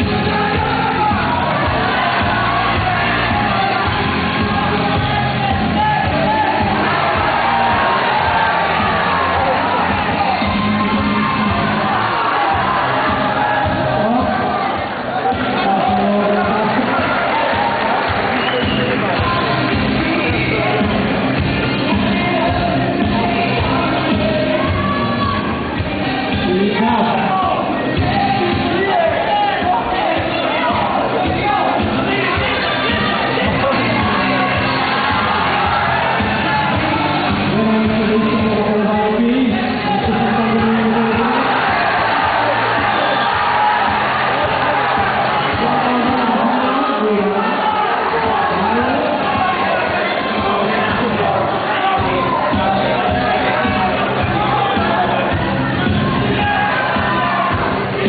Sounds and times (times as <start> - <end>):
Music: 0.0 - 58.0
Speech: 13.7 - 17.4, 22.1 - 34.5, 36.8 - 41.7, 44.4 - 58.0.